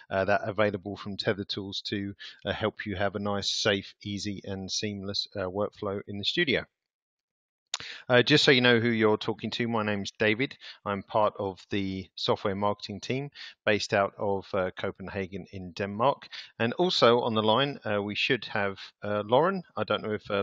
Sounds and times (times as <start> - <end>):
Speech: 0.0 - 6.7, 7.8 - 20.4.